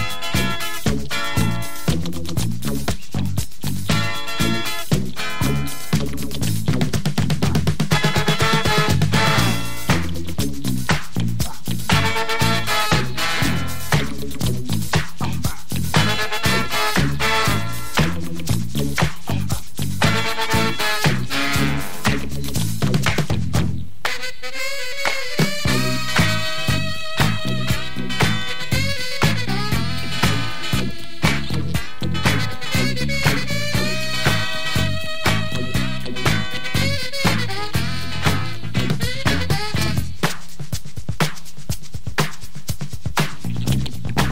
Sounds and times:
Disco: 0.0s - 44.3s.

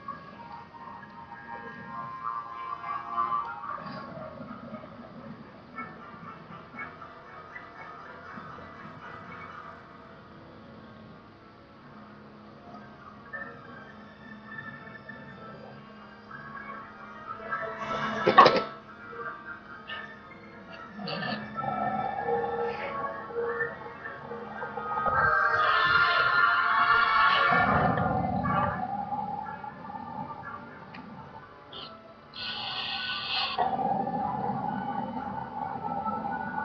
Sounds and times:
Music: 0.0s - 36.6s.

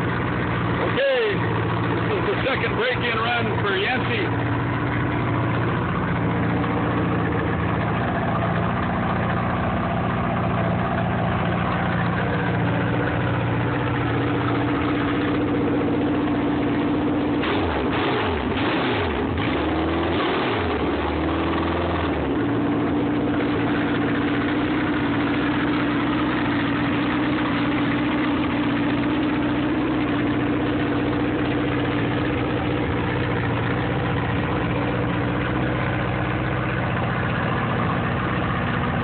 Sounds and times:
Idling: 0.0s - 39.0s
Medium engine (mid frequency): 0.0s - 39.0s.

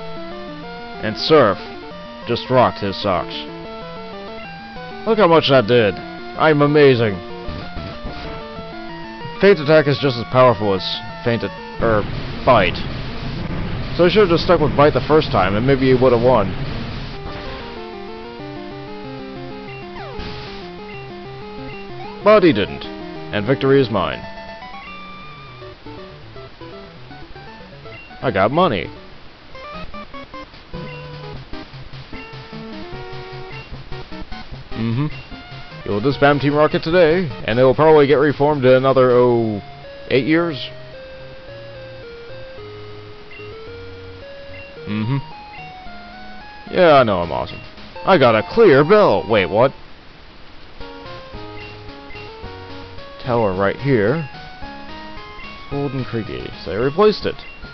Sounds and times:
Speech: 1.0s - 1.6s, 2.3s - 3.5s, 5.1s - 7.2s, 9.4s - 12.9s, 14.0s - 16.5s, 22.3s - 24.2s, 28.2s - 29.0s, 35.9s - 40.7s, 46.7s - 49.8s, 53.2s - 54.3s, 55.8s - 57.4s.

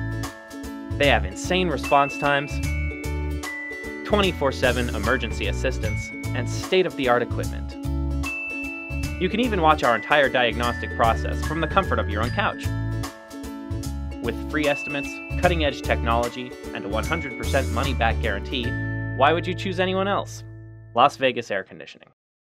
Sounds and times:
Music: 0.0s - 21.7s
Speech: 1.0s - 2.6s, 4.1s - 7.6s, 9.2s - 12.7s, 14.2s - 20.4s, 21.0s - 22.2s.

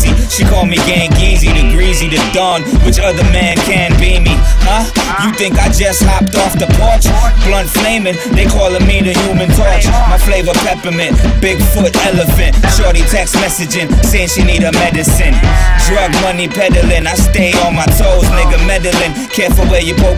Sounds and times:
Music: 0.0s - 20.1s.

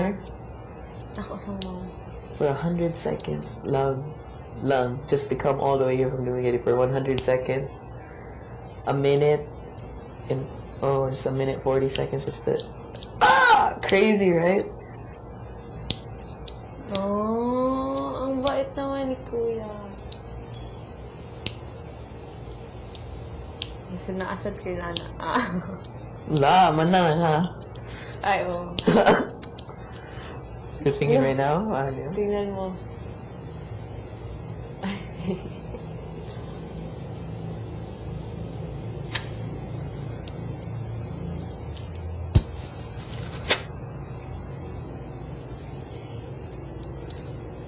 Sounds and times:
Conversation: 0.0s - 47.4s.

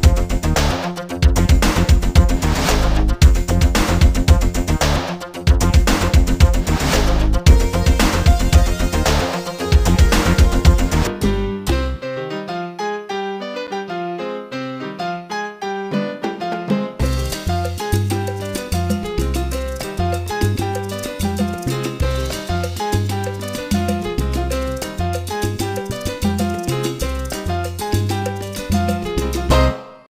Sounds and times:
Music: 0.0s - 30.1s.

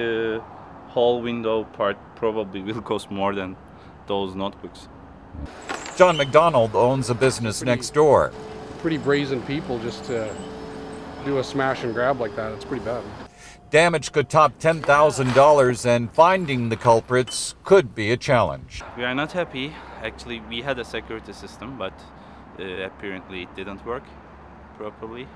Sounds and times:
Speech: 0.0s - 4.9s, 6.0s - 10.4s, 11.2s - 22.0s, 22.6s - 24.1s, 24.8s - 25.3s.

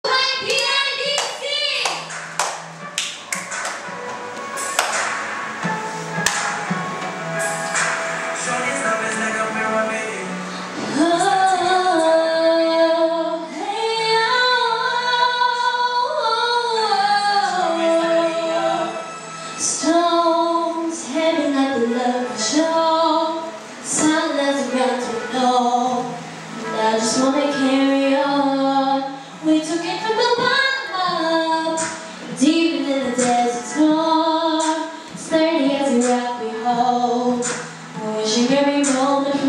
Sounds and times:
Speech: 0.0s - 2.0s
Music: 0.0s - 39.4s
Clapping: 0.5s - 3.9s, 4.8s - 5.2s, 6.2s - 6.5s.

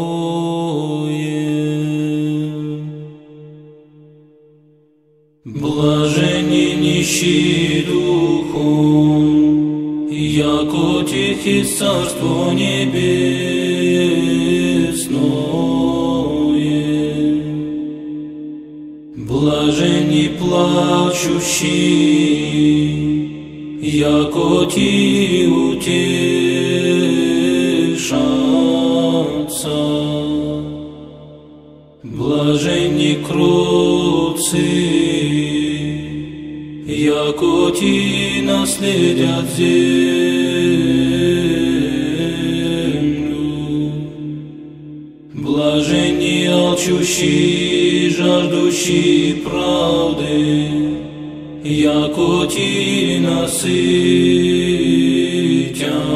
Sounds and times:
Mantra: 0.0s - 3.1s, 5.5s - 17.9s, 19.2s - 31.0s, 32.0s - 44.5s, 45.3s - 56.1s.

